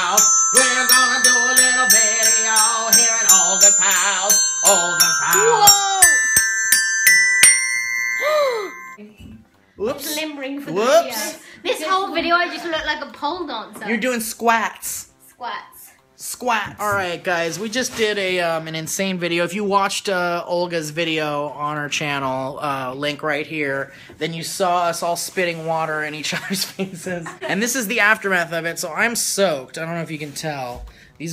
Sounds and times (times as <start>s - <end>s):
Music: 0.0s - 22.6s
Inside, small room: 0.0s - 31.3s.